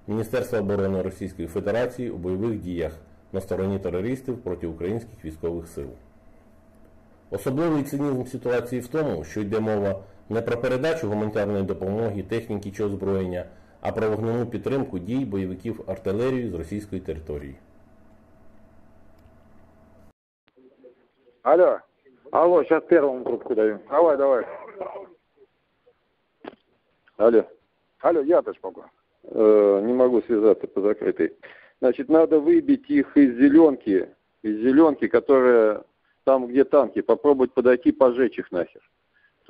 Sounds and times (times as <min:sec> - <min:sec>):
Speech: 0:00.0 - 0:06.0, 0:07.3 - 0:17.6, 0:20.6 - 0:25.2, 0:27.2 - 0:38.9.